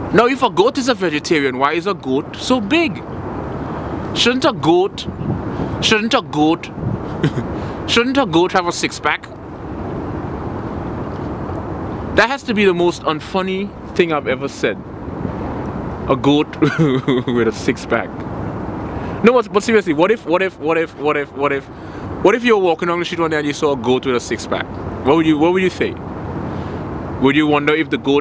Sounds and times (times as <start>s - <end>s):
Speech: 0.1s - 3.0s, 4.2s - 5.2s, 5.8s - 6.7s, 7.9s - 9.3s, 12.2s - 14.8s, 16.1s - 18.2s, 19.2s - 26.0s, 27.2s - 28.2s.